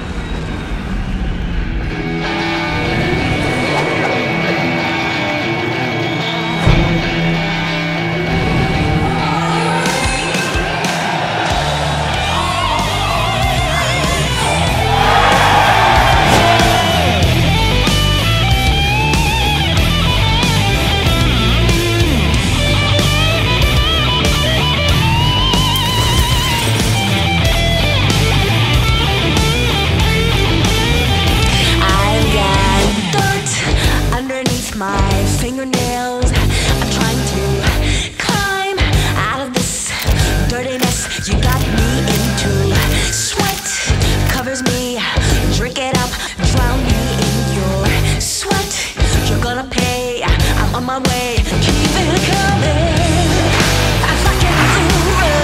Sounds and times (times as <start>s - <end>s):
Music: 0.1s - 55.4s.